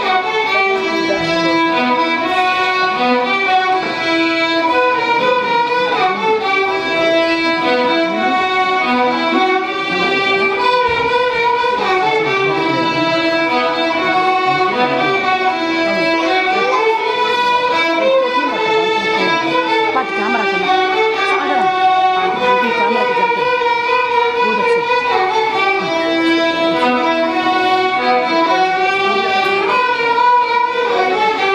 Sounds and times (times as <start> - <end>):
Violin, fiddle: 0.0 - 31.5.